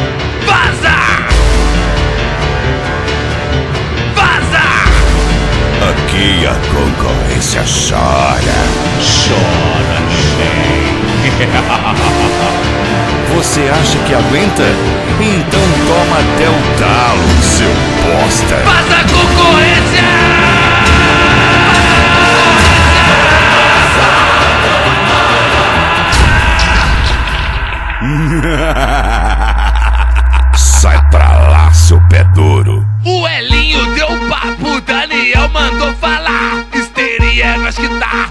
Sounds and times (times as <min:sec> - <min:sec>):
Music: 0:00.0 - 0:38.3
Speech: 0:05.8 - 0:10.9, 0:13.3 - 0:20.4, 0:30.6 - 0:36.4.